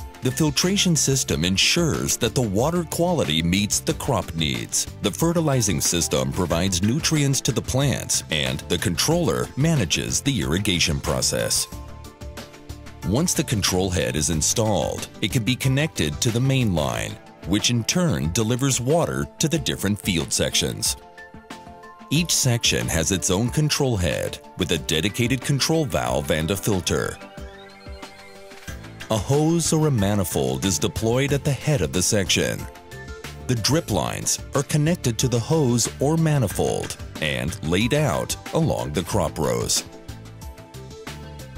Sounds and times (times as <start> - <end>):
Music: 0.0 - 41.5
Speech: 0.2 - 11.7, 13.0 - 21.0, 22.1 - 27.2, 29.1 - 32.7, 33.5 - 39.9.